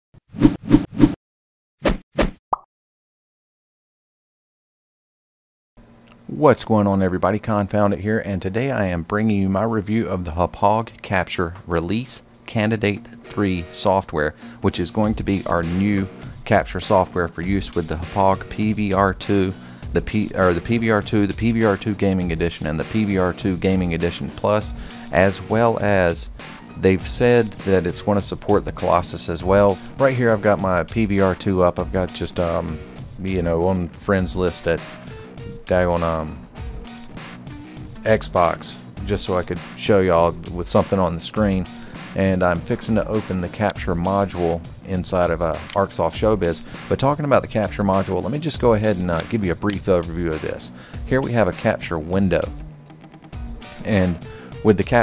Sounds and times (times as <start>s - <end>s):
Speech: 6.3s - 34.8s, 35.5s - 36.4s, 38.0s - 52.6s, 53.8s - 55.0s.